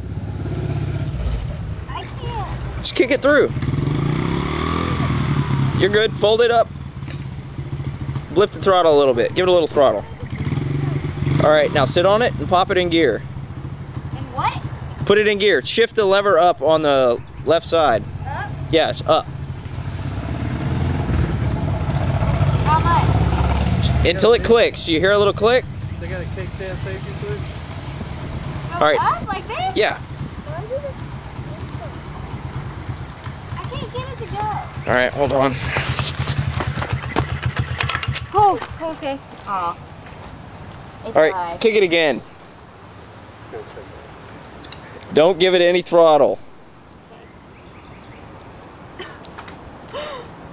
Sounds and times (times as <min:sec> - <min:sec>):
Motorcycle: 0:00.0 - 0:50.2
Outside, rural or natural: 0:00.0 - 0:50.5.